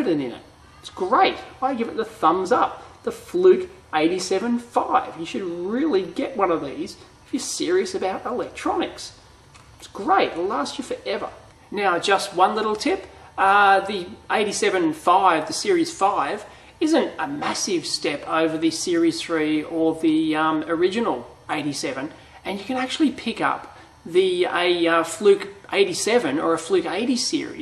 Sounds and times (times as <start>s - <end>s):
Speech: 0.0s - 9.2s, 9.8s - 27.6s
Inside, small room: 0.0s - 27.6s.